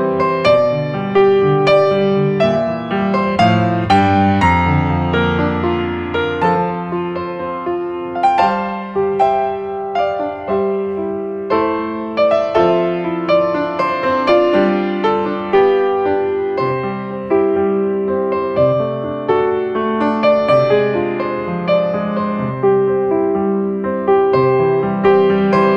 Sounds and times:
Music: 0.0s - 25.7s.

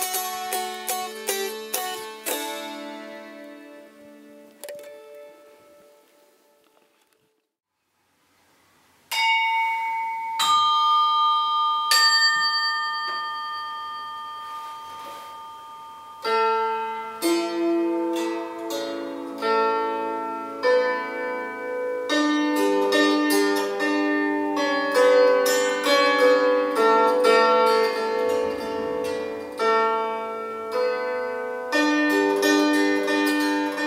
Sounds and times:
Musical instrument: 14.3s - 33.8s.

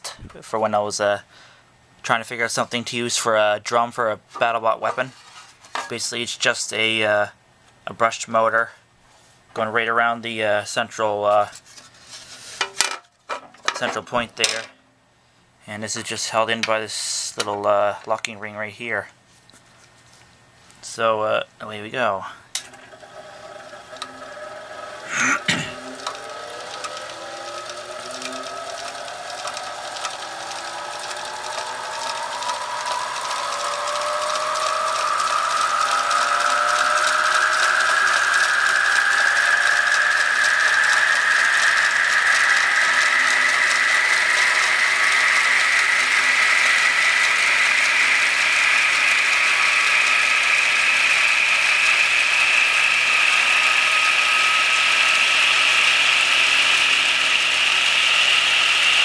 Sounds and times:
Speech: 0.0s - 1.3s, 2.0s - 5.2s, 5.9s - 8.8s, 9.6s - 11.6s, 13.7s - 14.8s, 15.6s - 19.1s, 20.8s - 22.5s.

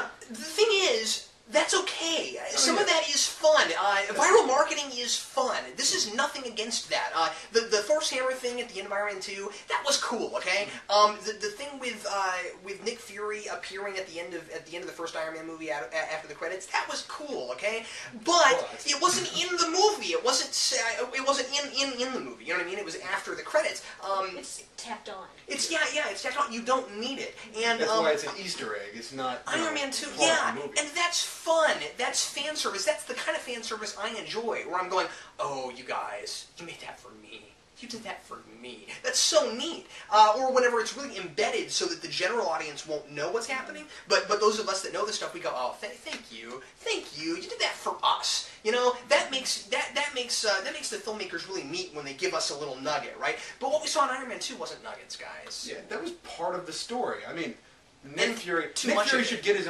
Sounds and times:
Inside, small room: 0.0s - 59.6s
Speech: 0.0s - 59.6s.

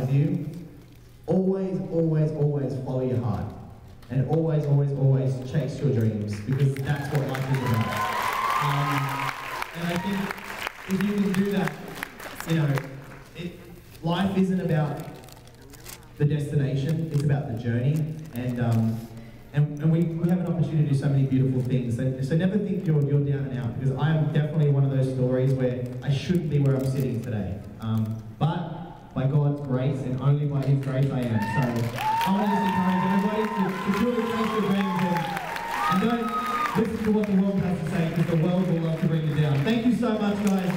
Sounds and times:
Male speech, man speaking: 0.0s - 0.5s, 1.3s - 7.9s, 8.6s - 11.8s, 12.4s - 15.2s, 16.2s - 19.0s, 19.6s - 35.3s, 35.9s - 40.7s.

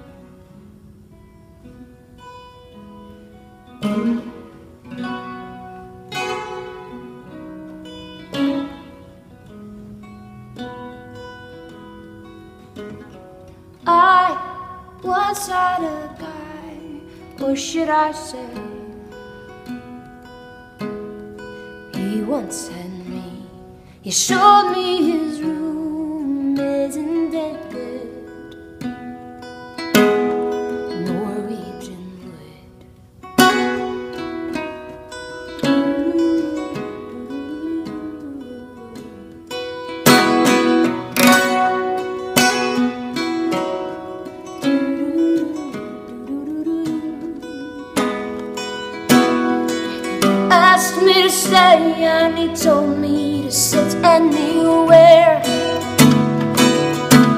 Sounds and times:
Music: 0.0s - 57.3s.

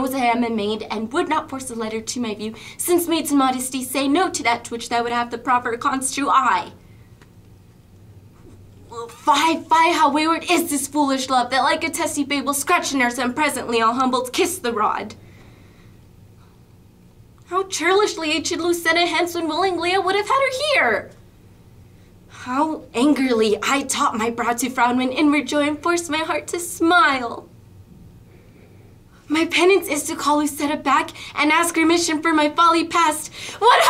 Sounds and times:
Narration, monologue: 0.0s - 33.9s.

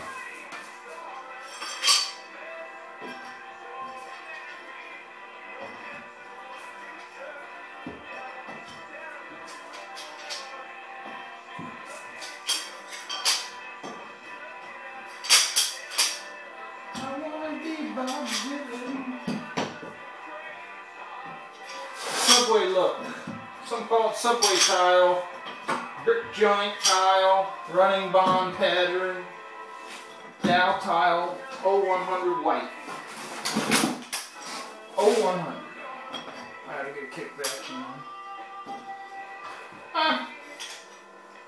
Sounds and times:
Music: 0.0s - 41.4s.

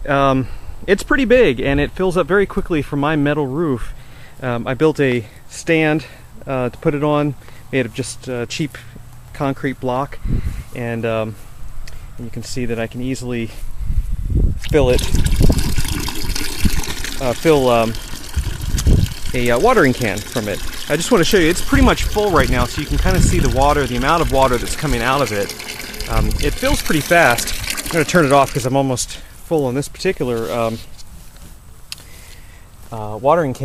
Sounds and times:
Speech: 0.0s - 8.8s, 9.4s - 10.2s, 10.8s - 11.4s, 12.2s - 13.6s, 17.2s - 18.0s, 19.3s - 25.5s, 26.1s - 30.9s, 32.9s - 33.6s.

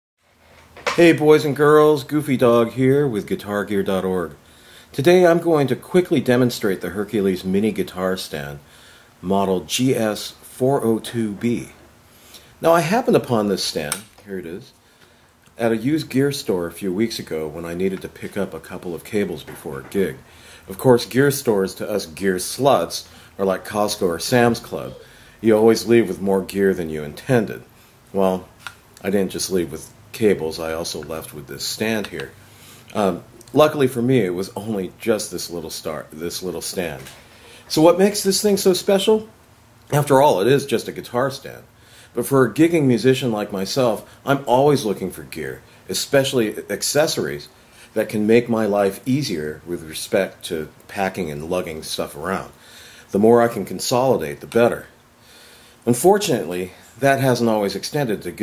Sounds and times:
Speech: 0.9s - 11.8s, 12.6s - 14.8s, 15.6s - 55.0s, 55.8s - 58.4s.

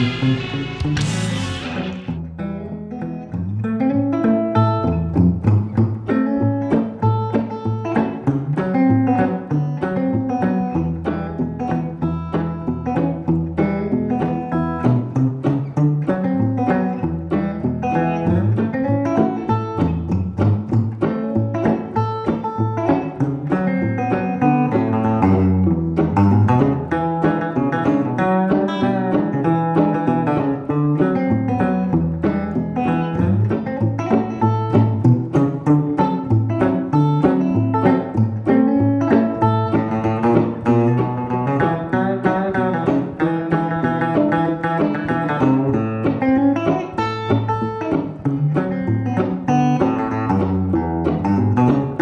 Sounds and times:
Music: 0.0s - 52.0s.

